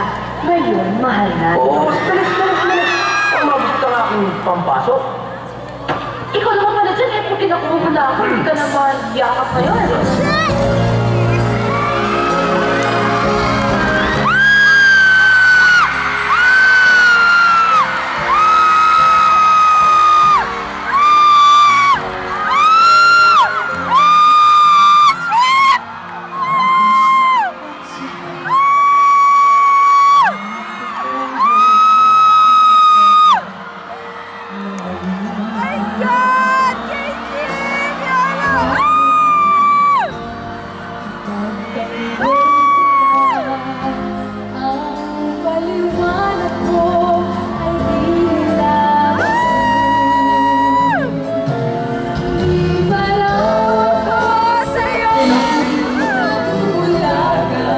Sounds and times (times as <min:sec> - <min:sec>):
Music: 0:00.0 - 0:57.7.